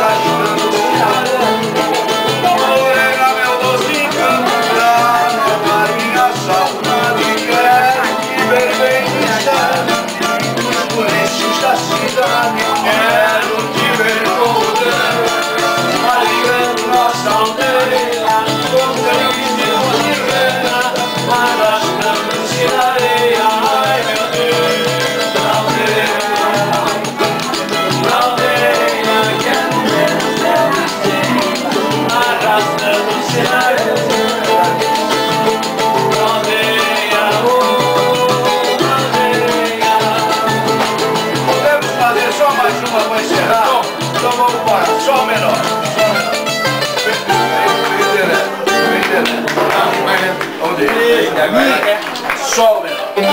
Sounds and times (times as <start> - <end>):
Music: 0.0 - 53.3.